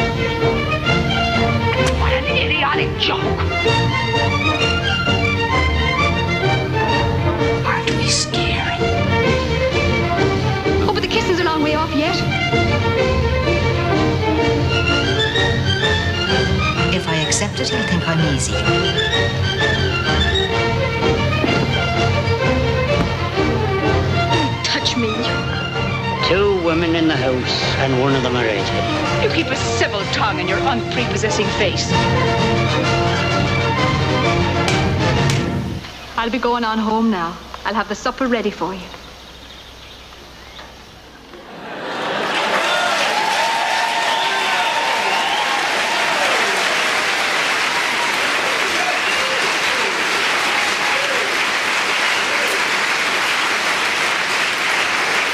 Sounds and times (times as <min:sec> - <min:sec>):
Music: 0:00.0 - 0:37.6, 0:43.2 - 0:55.3.